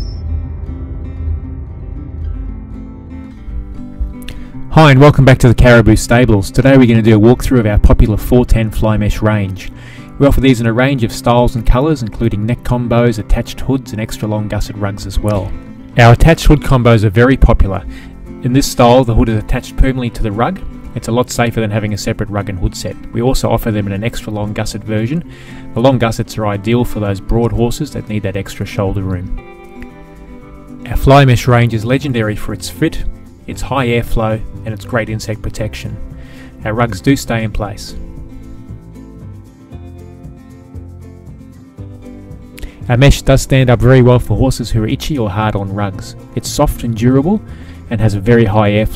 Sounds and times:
Music: 0.0s - 48.9s
Speech: 4.7s - 29.4s, 30.9s - 36.0s, 36.6s - 38.0s, 42.8s - 48.9s.

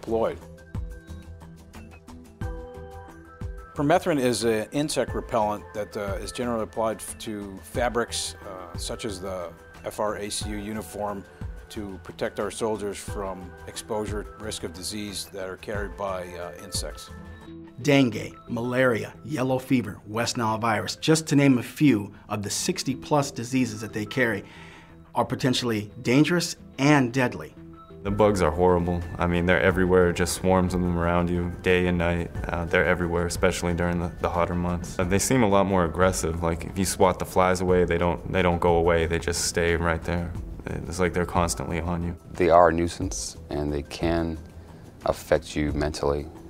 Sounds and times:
Speech: 0.0s - 0.4s, 3.8s - 17.1s, 17.8s - 24.4s, 25.2s - 44.4s, 45.0s - 46.4s
Music: 0.0s - 46.5s.

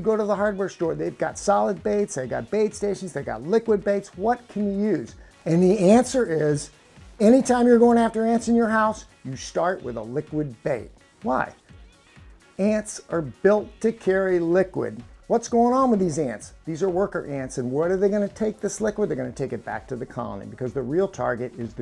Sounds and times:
Speech: 0.0s - 11.6s, 12.6s - 21.8s
Music: 0.0s - 21.8s.

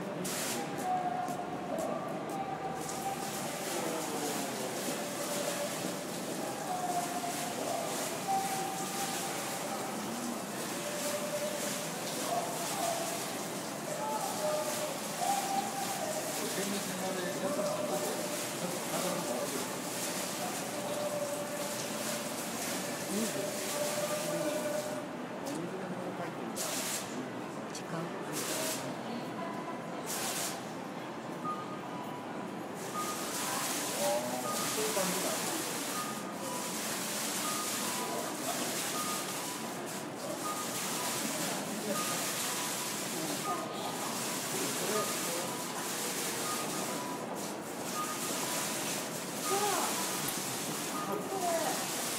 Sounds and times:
Speech: 0.0s - 31.7s, 32.9s - 36.7s, 40.2s - 47.0s, 49.4s - 50.1s, 50.9s - 52.1s.

